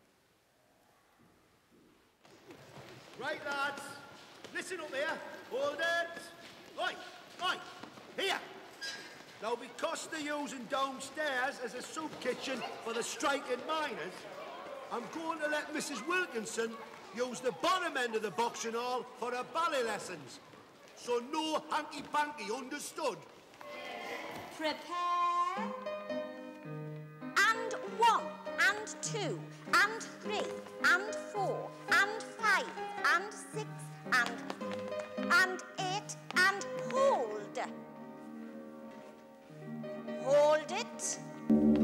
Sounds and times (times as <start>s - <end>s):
Inside, large room or hall: 0.0s - 41.8s
Music: 25.5s - 41.8s
Speech: 27.4s - 34.4s, 35.3s - 37.7s.